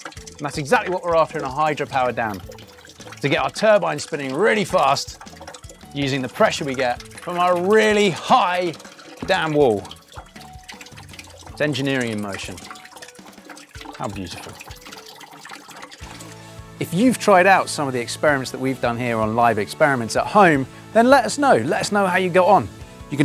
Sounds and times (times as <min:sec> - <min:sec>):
Music: 0:00.0 - 0:23.2
Speech: 0:00.4 - 0:02.4, 0:03.2 - 0:05.1, 0:06.0 - 0:09.9, 0:11.6 - 0:12.6, 0:14.0 - 0:14.6, 0:16.8 - 0:23.2.